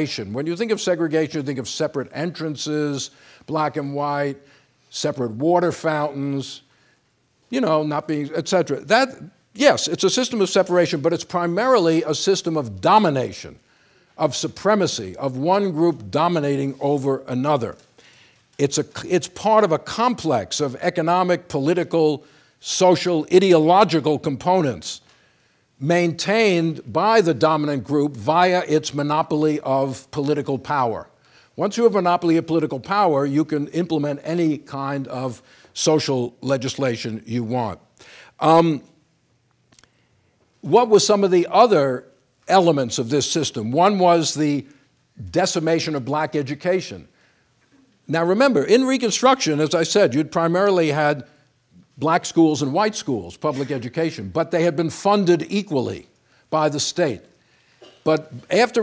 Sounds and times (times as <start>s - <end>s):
Speech: 0.0s - 6.6s, 7.5s - 13.6s, 14.2s - 17.8s, 18.6s - 25.0s, 25.8s - 37.8s, 38.4s - 39.0s, 40.6s - 47.1s, 48.1s - 51.3s, 52.0s - 57.3s, 58.0s - 58.8s.